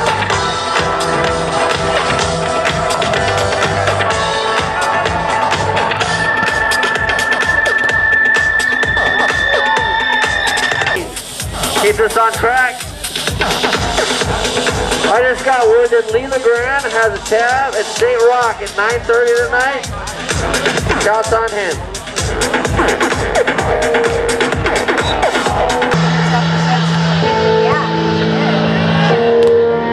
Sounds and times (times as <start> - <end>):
Music: 0.0 - 29.9
Speech: 11.0 - 13.0, 15.1 - 20.2, 21.0 - 22.0.